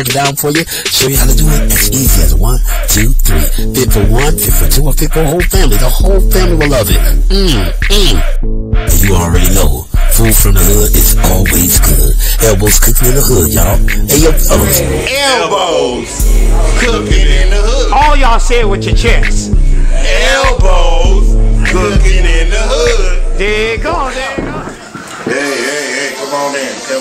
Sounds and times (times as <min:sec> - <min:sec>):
Music: 0:00.0 - 0:15.3, 0:16.0 - 0:26.1
Speech: 0:00.0 - 0:20.6.